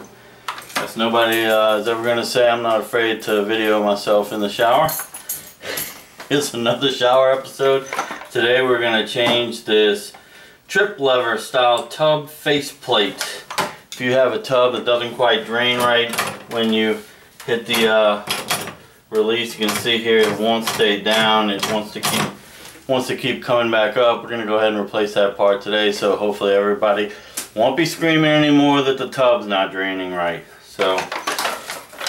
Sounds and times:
Speech: 0.8 - 5.0, 6.3 - 18.4, 19.1 - 31.2.

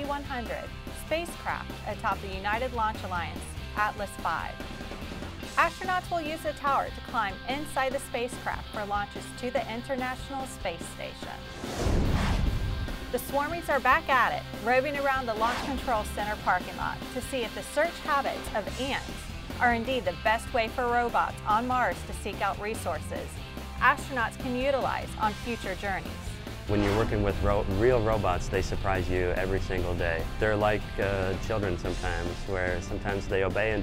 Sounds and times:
Music: 0.0 - 33.8.

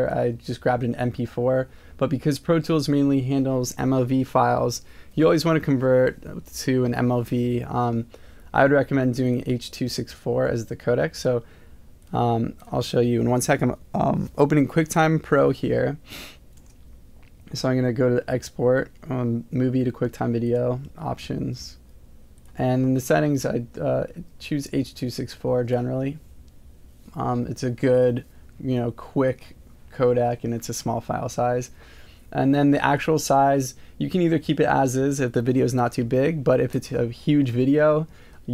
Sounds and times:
Speech: 0.0 - 11.4, 12.1 - 16.0, 17.5 - 21.8, 22.5 - 26.2, 27.1 - 38.5.

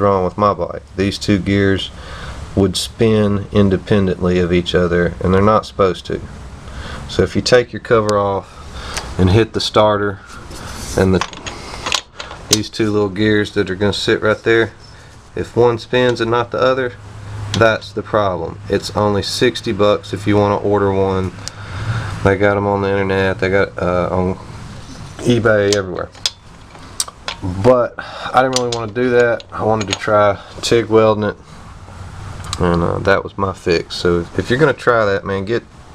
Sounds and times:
Speech: 0.0 - 2.0, 2.6 - 6.3, 7.1 - 8.5, 9.2 - 10.3, 10.9 - 11.3, 12.5 - 14.8, 15.4 - 17.0, 17.6 - 21.4, 22.2 - 26.2, 27.4 - 31.4, 32.5 - 35.7
Inside, small room: 0.0 - 35.9.

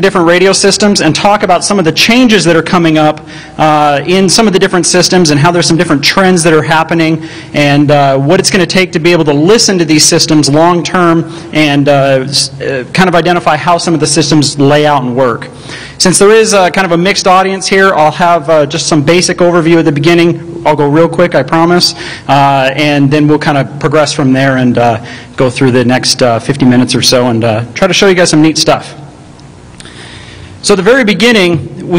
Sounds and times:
Speech: 0.0 - 29.0, 30.6 - 31.9.

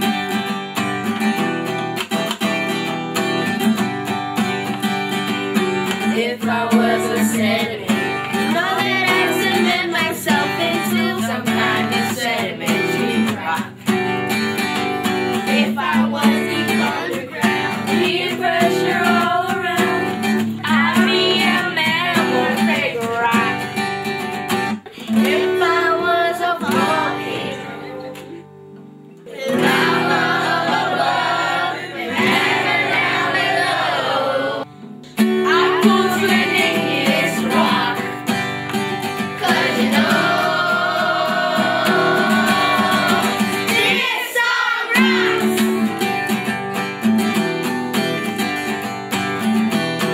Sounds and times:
Music: 0.0 - 50.1.

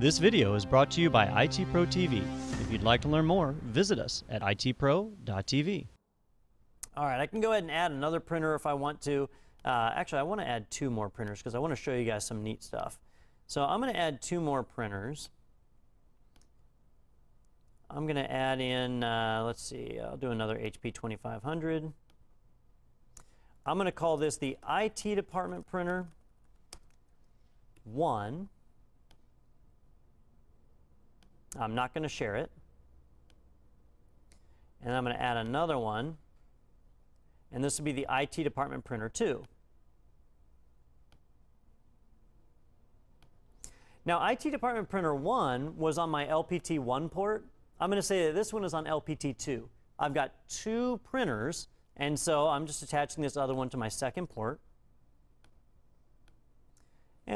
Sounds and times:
Speech: 0.0 - 6.0, 6.8 - 15.4, 17.9 - 22.0, 23.7 - 26.2, 27.8 - 28.5, 31.6 - 32.6, 34.8 - 36.2, 37.5 - 39.5, 44.0 - 54.6.

